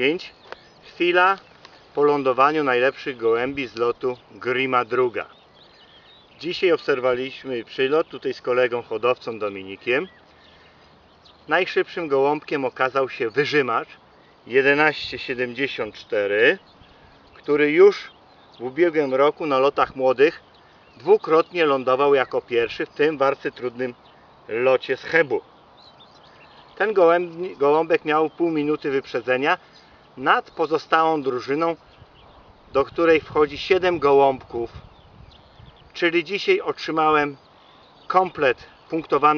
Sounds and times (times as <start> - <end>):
Male speech, man speaking: 0.0 - 1.4, 2.0 - 5.3, 6.4 - 10.1, 11.5 - 16.6, 17.4 - 20.4, 21.0 - 25.4, 26.8 - 29.6, 30.2 - 31.8, 32.8 - 34.8, 36.0 - 37.4, 38.1 - 39.3
Outside, rural or natural: 0.0 - 39.3.